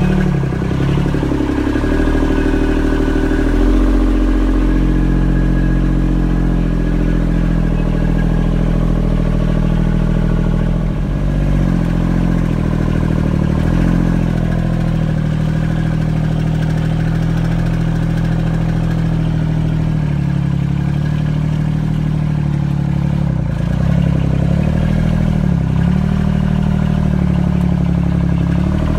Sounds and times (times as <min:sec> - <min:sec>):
Vehicle: 0:00.0 - 0:28.9.